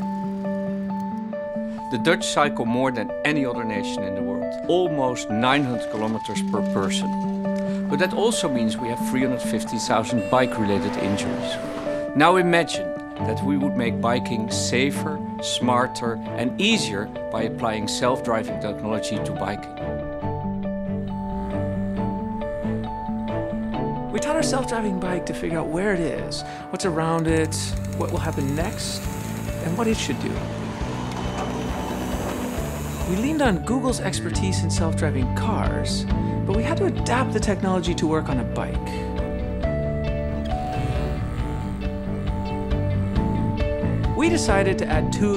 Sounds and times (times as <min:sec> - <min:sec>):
Music: 0:00.0 - 0:45.3
Speech: 0:01.9 - 0:07.1, 0:07.9 - 0:11.5, 0:12.2 - 0:19.7, 0:24.1 - 0:29.0, 0:29.6 - 0:30.4, 0:33.1 - 0:38.9, 0:44.2 - 0:45.3
Bicycle: 0:27.2 - 0:33.5.